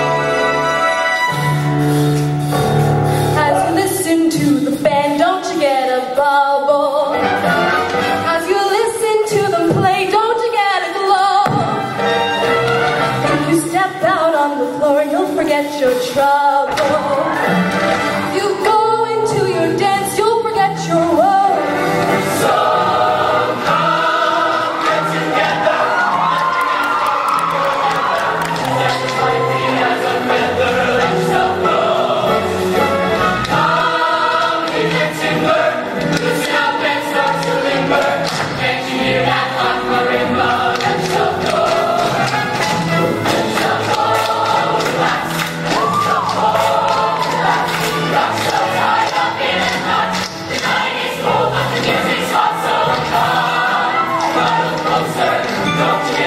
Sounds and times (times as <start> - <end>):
Music: 0.0 - 56.2.